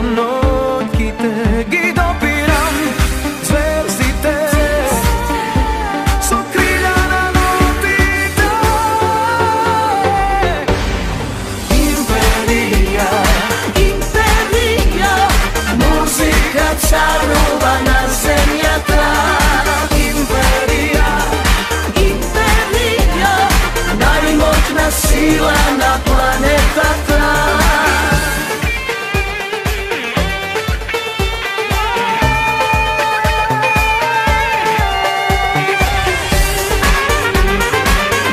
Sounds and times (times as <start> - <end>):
Music: 0.0 - 38.3.